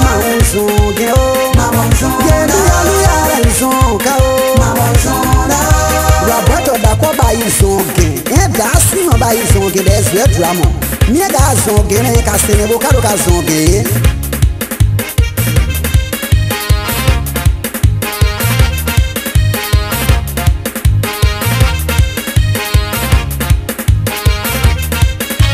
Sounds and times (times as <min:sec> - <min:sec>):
Gospel music: 0:00.0 - 0:25.5.